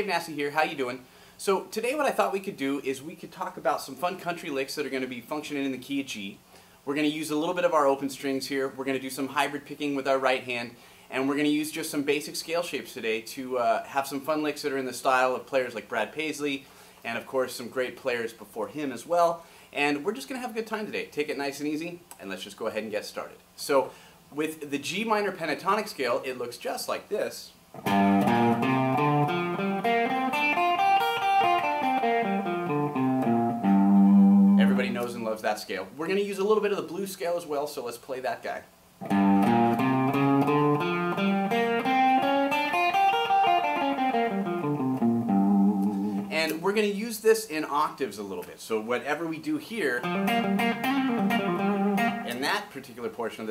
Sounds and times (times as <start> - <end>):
Speech: 0.0 - 27.6, 34.6 - 38.7, 46.3 - 50.1, 52.2 - 53.5.